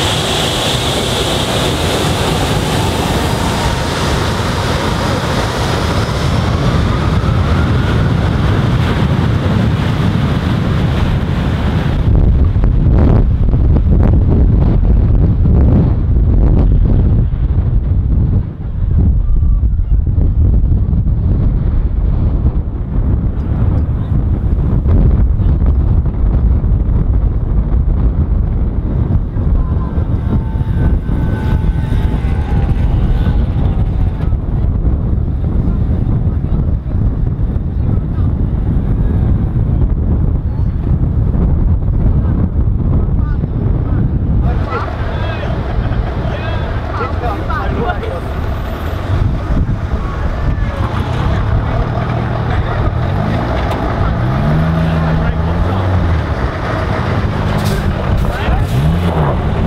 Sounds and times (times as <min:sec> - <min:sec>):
Outside, urban or manmade: 0:00.0 - 0:59.6
Vehicle: 0:00.0 - 0:59.6
Speech: 0:29.3 - 0:34.7, 0:43.0 - 0:48.9, 0:49.9 - 0:53.2, 0:58.2 - 0:59.4.